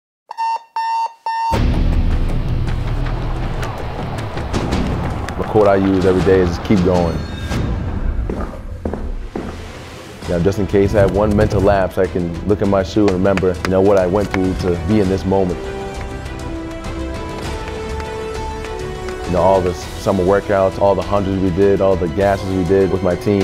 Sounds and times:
Alarm: 0:00.3 - 0:01.7
Music: 0:01.5 - 0:23.4
Speech: 0:05.4 - 0:07.2, 0:10.3 - 0:15.6, 0:19.3 - 0:23.4.

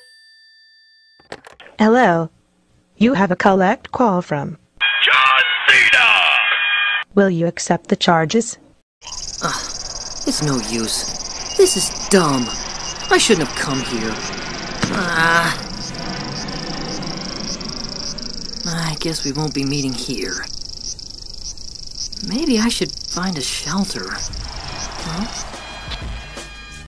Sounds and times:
Speech: 0:03.0 - 0:06.5, 0:10.3 - 0:14.2, 0:14.8 - 0:15.6, 0:18.6 - 0:20.5, 0:22.2 - 0:24.2
Music: 0:25.8 - 0:26.8.

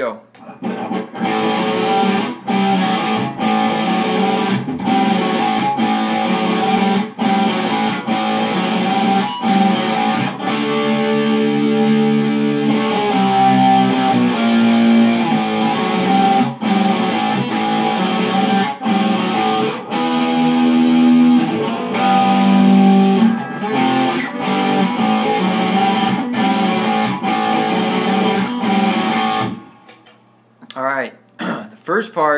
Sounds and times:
Guitar: 0:00.3 - 0:30.8.

